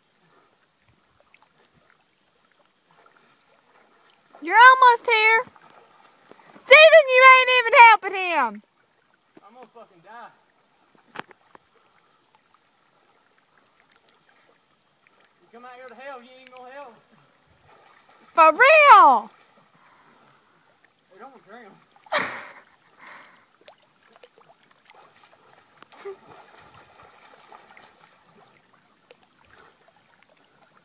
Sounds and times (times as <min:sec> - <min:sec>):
Water: 0:00.0 - 0:30.8.